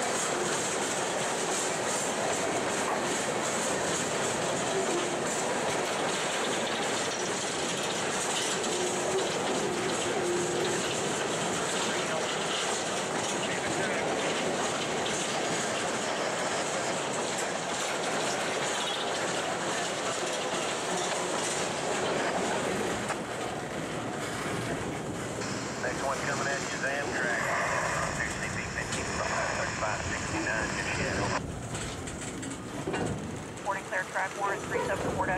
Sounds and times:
Clickety-clack: 0.0s - 25.5s, 31.4s - 35.3s
Railroad car, train wagon: 0.0s - 35.3s
Train: 0.0s - 35.3s.

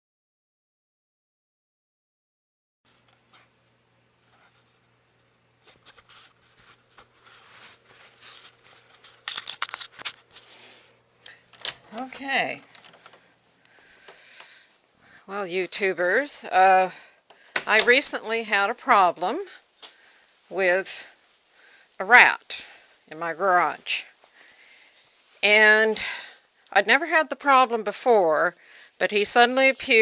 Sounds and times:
Speech: 11.9s - 12.7s, 15.3s - 17.1s, 17.7s - 19.6s, 20.5s - 21.2s, 22.0s - 24.2s, 25.4s - 30.0s.

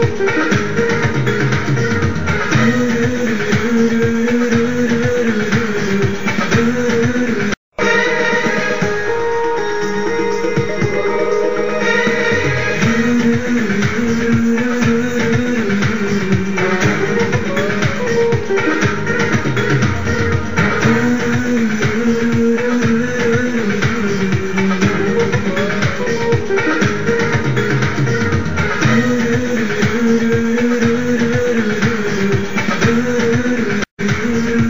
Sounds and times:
Rhythm and blues: 0.0s - 34.7s.

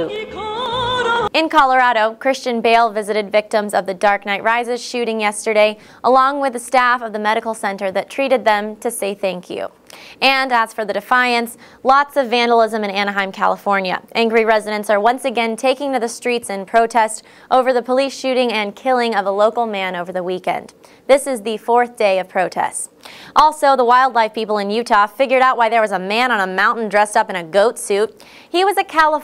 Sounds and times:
Speech: 1.4s - 29.2s.

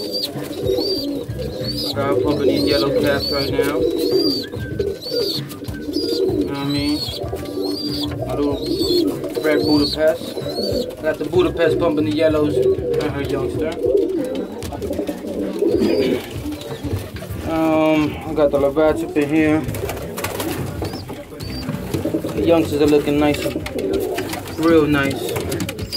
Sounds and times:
Pigeon, dove: 0.0s - 25.9s
Speech: 1.9s - 3.9s, 6.5s - 7.0s, 8.2s - 10.2s, 11.0s - 13.8s, 17.4s - 19.7s, 22.4s - 23.7s, 24.5s - 25.7s.

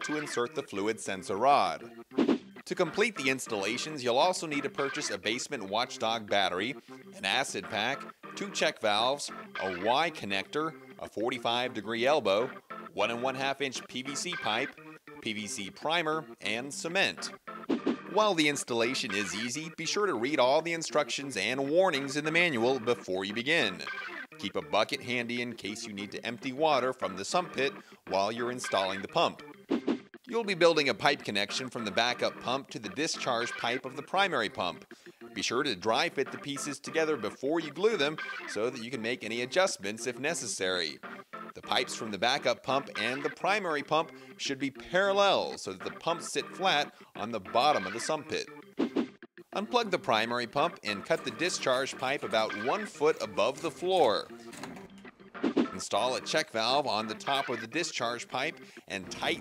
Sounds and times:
Speech: 0.0s - 1.8s, 2.7s - 17.3s, 18.2s - 29.4s, 30.3s - 34.8s, 35.4s - 41.0s, 41.6s - 48.5s, 49.6s - 54.3s, 55.8s - 59.4s
Music: 0.0s - 59.4s.

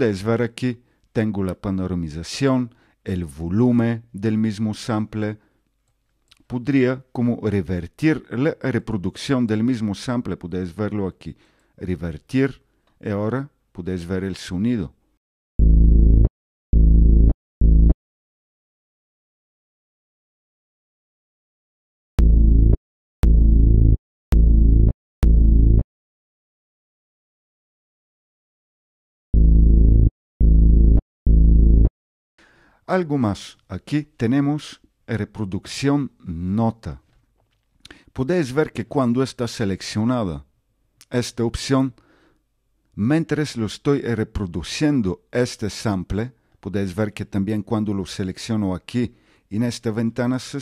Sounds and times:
Speech: 0.0s - 5.4s, 6.4s - 15.0s, 32.9s - 37.0s, 38.2s - 42.0s, 43.0s - 50.6s.

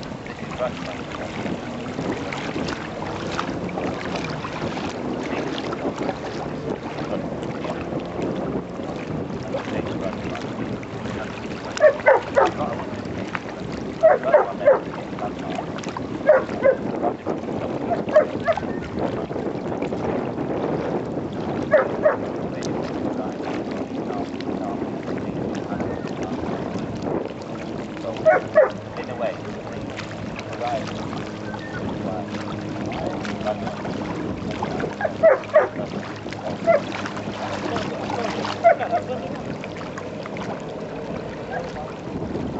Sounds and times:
Stream: 0.0s - 42.5s
Speech: 0.5s - 1.5s, 9.4s - 13.4s, 14.1s - 15.7s, 22.6s - 23.4s, 24.0s - 24.9s, 29.0s - 29.9s, 30.6s - 30.9s, 32.0s - 32.3s, 32.9s - 34.0s, 37.6s - 39.4s
Bow-wow: 11.8s - 12.6s, 14.0s - 14.9s, 16.2s - 17.2s, 17.9s - 18.7s, 21.7s - 22.2s, 28.2s - 28.8s, 35.0s - 35.8s.

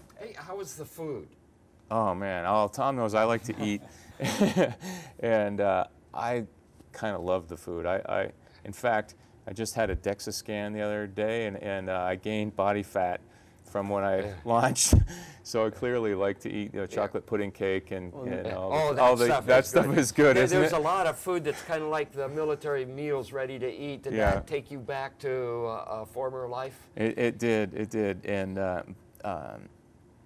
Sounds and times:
Speech: 5.2s - 29.7s.

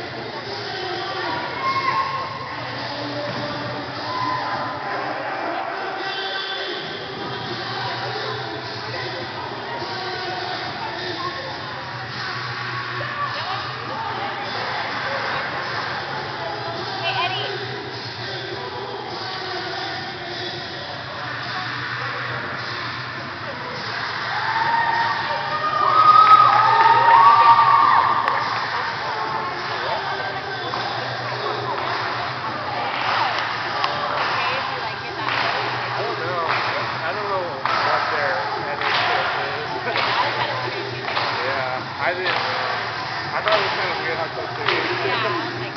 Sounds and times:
Speech: 0.0s - 24.2s, 28.3s - 45.7s.

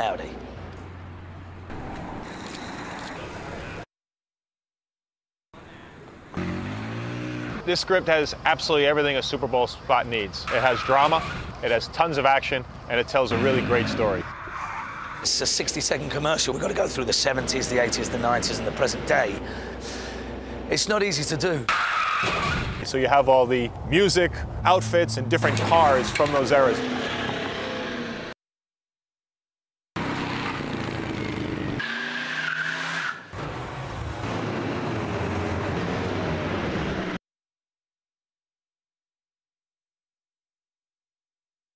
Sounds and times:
Tire squeal: 10.5s - 11.6s, 13.4s - 15.3s, 21.7s - 22.8s, 30.0s - 34.1s.

